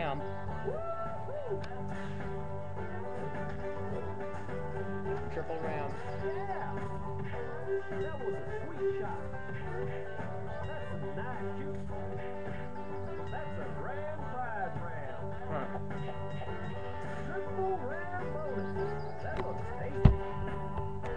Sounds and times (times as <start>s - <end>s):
Music: 0.0s - 21.1s
Speech: 5.2s - 6.9s, 15.4s - 15.8s.